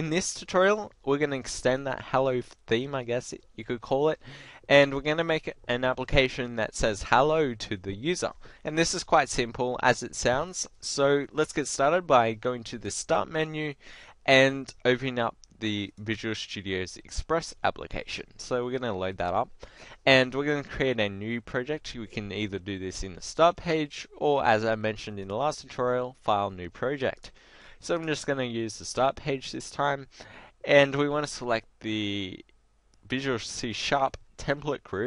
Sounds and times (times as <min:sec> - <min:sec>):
Speech: 0:00.0 - 0:32.5, 0:33.1 - 0:35.0.